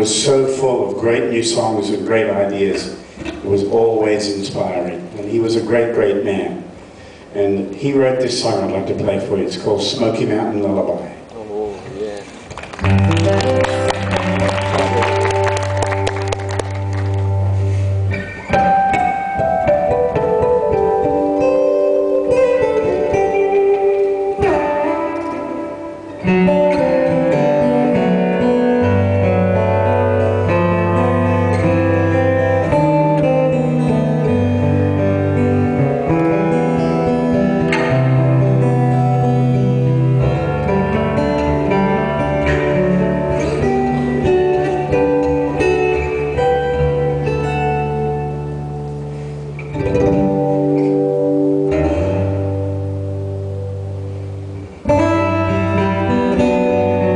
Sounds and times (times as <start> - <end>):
Speech: 0.0 - 6.7, 7.4 - 12.3
Music: 12.6 - 57.1.